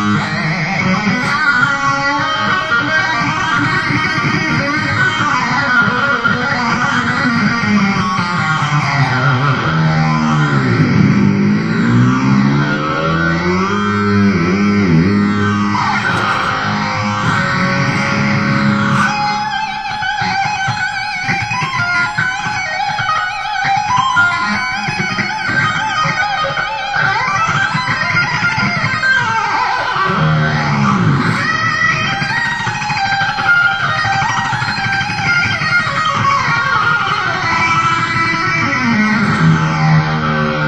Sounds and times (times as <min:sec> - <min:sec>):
Guitar: 0:00.0 - 0:40.6
Heavy metal: 0:00.0 - 0:40.6.